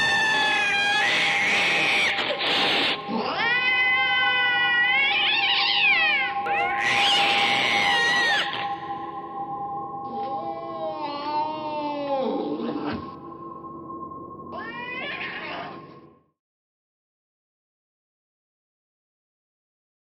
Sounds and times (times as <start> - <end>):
Meow: 0.0 - 8.6, 14.6 - 15.8.